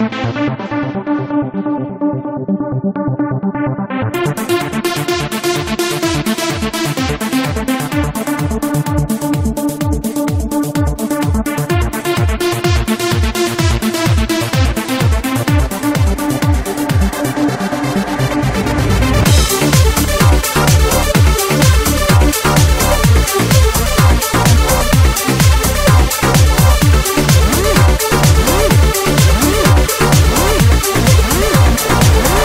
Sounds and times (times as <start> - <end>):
Music: 0.0 - 32.4.